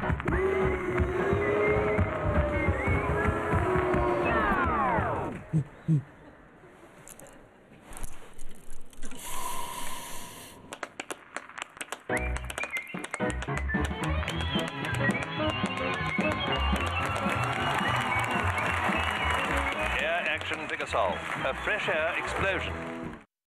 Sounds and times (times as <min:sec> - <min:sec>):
Music: 0:12.1 - 0:23.3
Speech: 0:20.0 - 0:22.7.